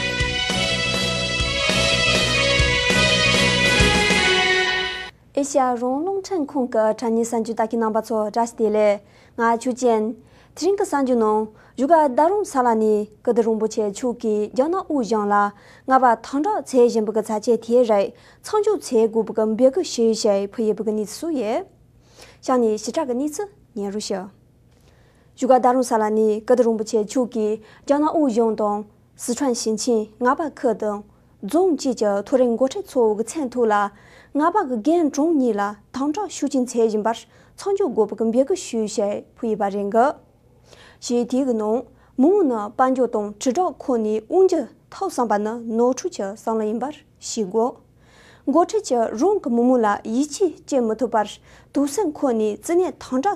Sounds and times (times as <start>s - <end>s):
Speech: 5.4s - 21.8s, 22.4s - 24.4s, 25.4s - 40.2s, 41.0s - 47.8s, 48.5s - 53.3s.